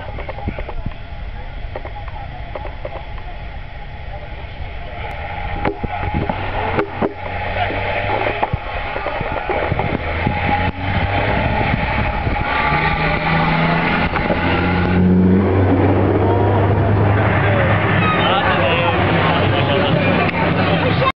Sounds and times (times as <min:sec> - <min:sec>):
Truck: 0:00.0 - 0:21.1
Speech: 0:17.1 - 0:21.1.